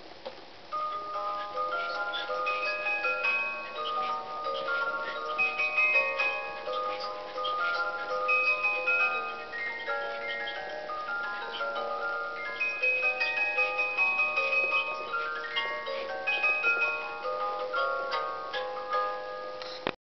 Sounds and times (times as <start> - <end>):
Music: 0.5 - 20.0.